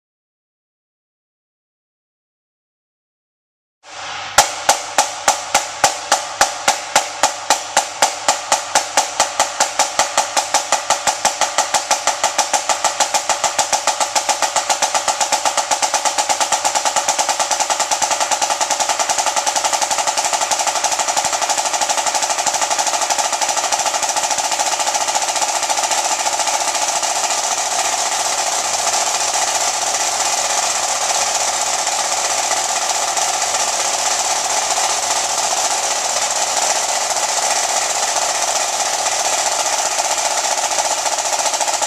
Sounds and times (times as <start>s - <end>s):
Drum: 3.9s - 41.8s
Drum kit: 3.9s - 41.8s.